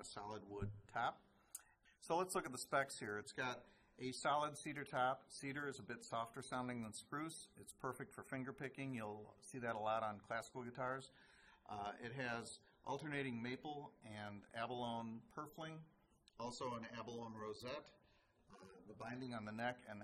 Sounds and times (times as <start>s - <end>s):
Speech: 0.0s - 20.0s.